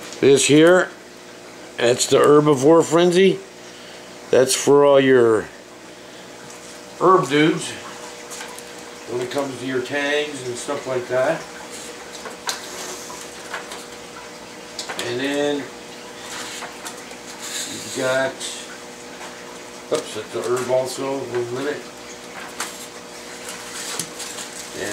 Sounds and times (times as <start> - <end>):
Speech: 0.2 - 1.0, 1.8 - 3.4, 4.3 - 5.5, 7.0 - 7.8, 9.1 - 11.5, 15.0 - 15.8, 17.7 - 18.7, 19.9 - 21.9, 24.7 - 24.9.